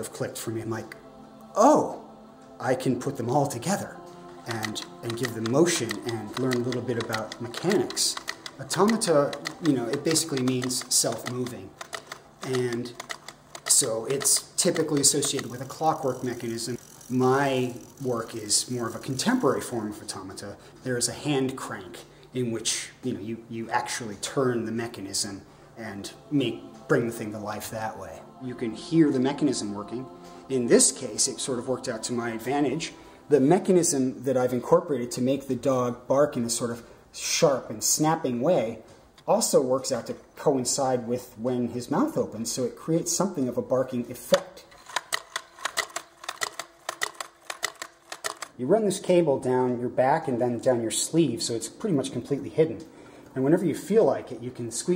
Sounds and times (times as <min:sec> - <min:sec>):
Speech: 0:00.0 - 0:01.0, 0:01.6 - 0:11.7, 0:12.4 - 0:13.0, 0:13.7 - 0:44.6, 0:48.6 - 0:54.9
Music: 0:00.0 - 0:54.9.